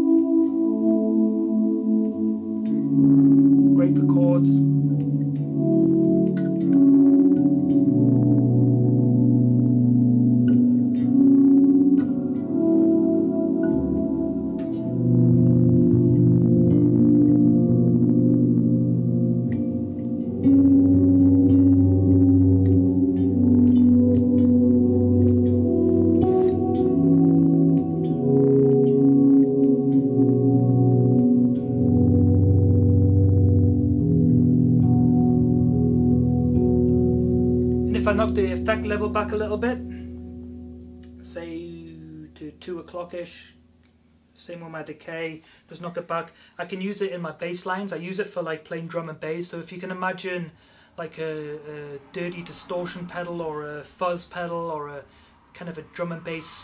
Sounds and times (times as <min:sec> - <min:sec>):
Bass guitar: 0:00.0 - 0:44.0
Ambient music: 0:00.0 - 0:44.3
Effects unit: 0:00.0 - 0:56.6.